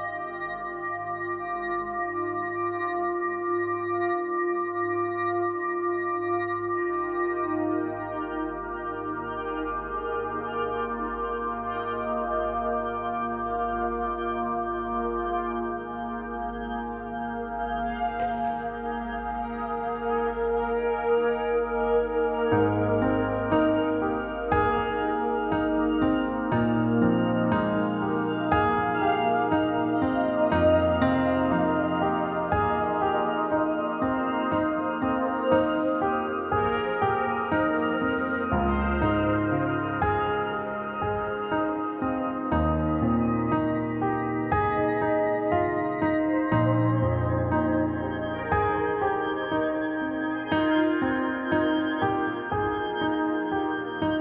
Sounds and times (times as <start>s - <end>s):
Music: 0.0s - 54.2s.